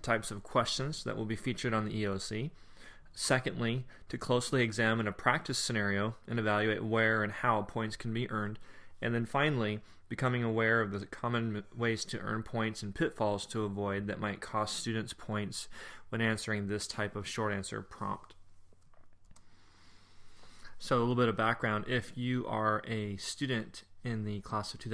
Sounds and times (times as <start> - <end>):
Speech: 0.0 - 2.5, 3.1 - 18.4, 20.8 - 24.9.